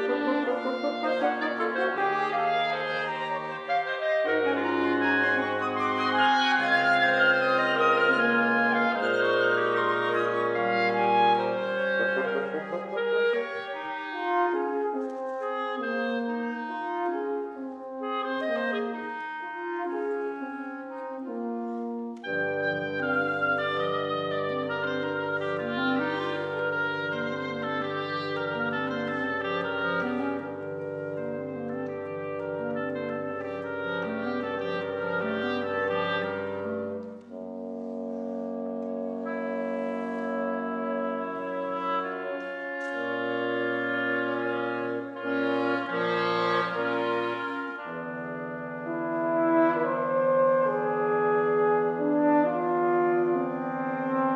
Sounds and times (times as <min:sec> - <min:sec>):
Clarinet: 0:00.0 - 0:54.3
French horn: 0:00.0 - 0:54.3
Inside, large room or hall: 0:00.0 - 0:54.3
Orchestra: 0:00.0 - 0:54.3.